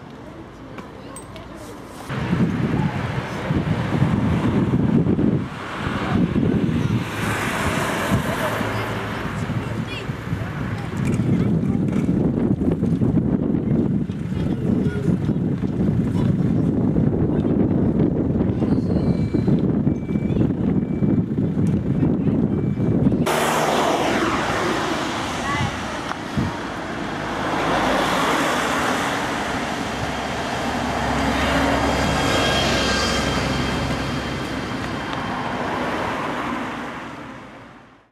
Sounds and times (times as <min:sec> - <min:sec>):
Vehicle: 0:00.0 - 0:38.1.